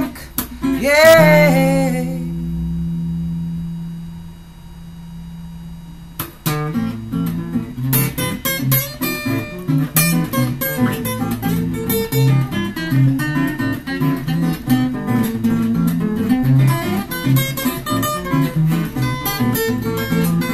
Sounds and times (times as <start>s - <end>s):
Guitar: 0.0s - 20.5s.